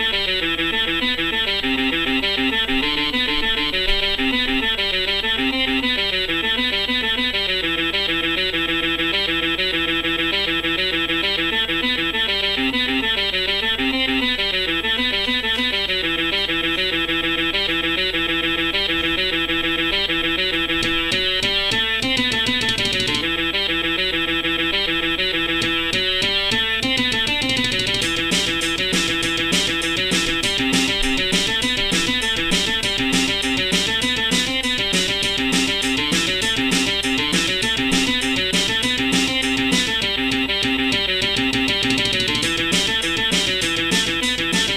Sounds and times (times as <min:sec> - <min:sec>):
Guitar: 0:00.0 - 0:44.7.